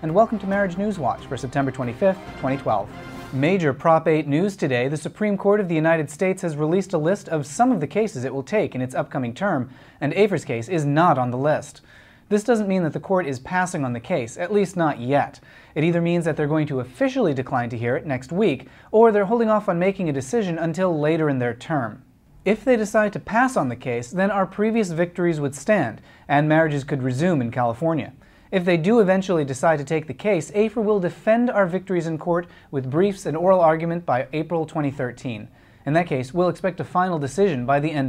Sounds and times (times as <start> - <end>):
Speech: 0.0 - 38.0.